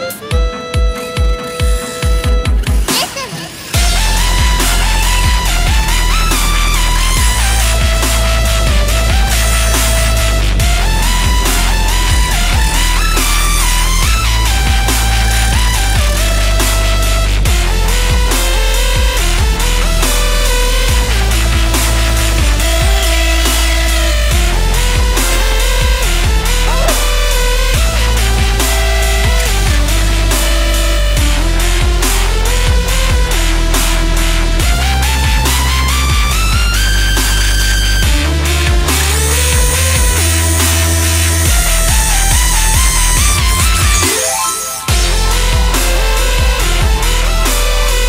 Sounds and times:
Music: 0:00.0 - 0:48.0.

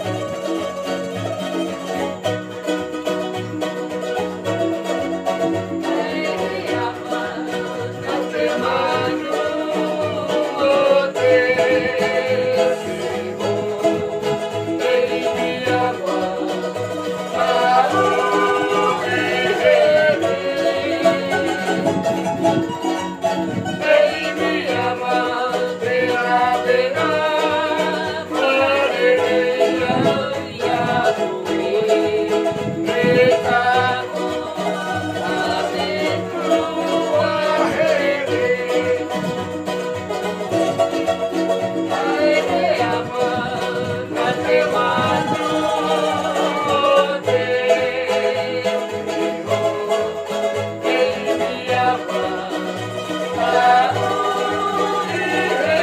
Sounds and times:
Ukulele: 0:00.0 - 0:55.8.

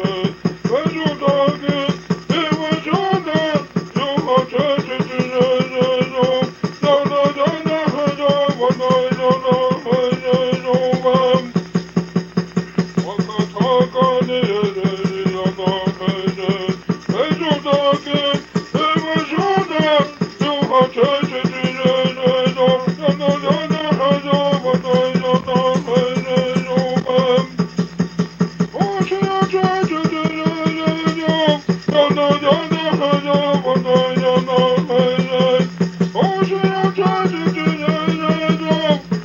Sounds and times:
Bass drum: 0:00.0 - 0:39.2.

